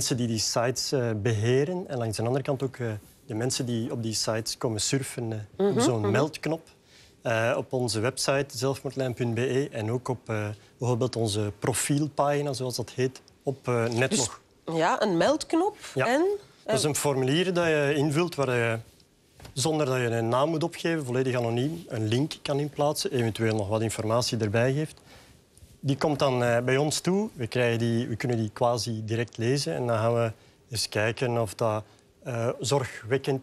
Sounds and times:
Speech: 0.0 - 6.6, 7.3 - 15.1.

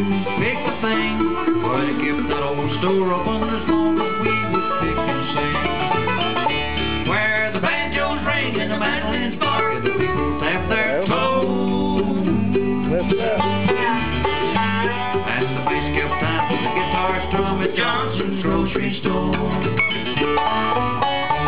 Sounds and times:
Banjo: 0.0 - 21.4
Bluegrass: 0.0 - 21.4
Guitar: 0.0 - 21.4
Song: 0.0 - 21.4.

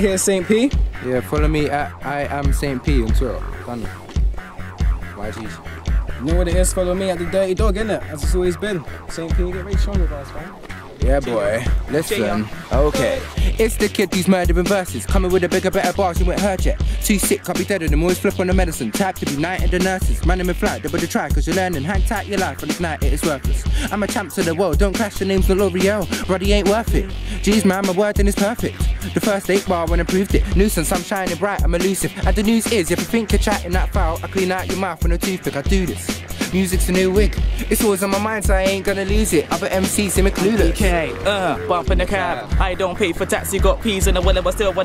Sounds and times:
Speech: 0.0 - 4.0, 5.2 - 5.6, 6.2 - 44.8
Music: 0.0 - 44.8.

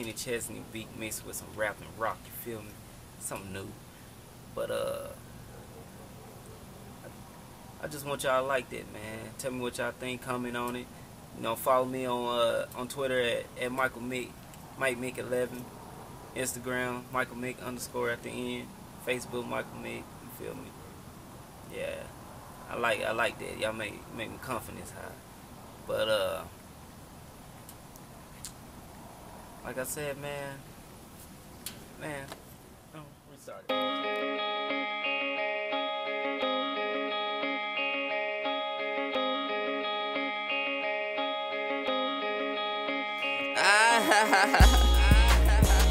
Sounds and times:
Speech: 0.0 - 3.8, 4.6 - 5.2, 7.8 - 15.7, 16.4 - 20.7, 21.7 - 22.1, 22.7 - 25.2, 25.9 - 26.5, 29.6 - 30.6, 32.0 - 32.4, 33.0 - 33.7
Music: 33.7 - 45.9.

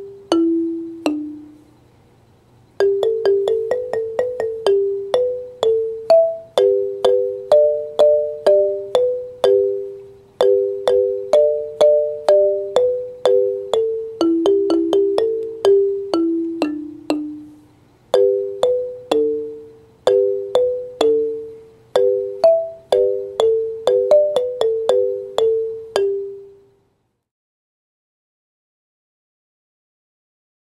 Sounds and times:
Marimba, xylophone: 0.0 - 1.6, 2.8 - 26.6.

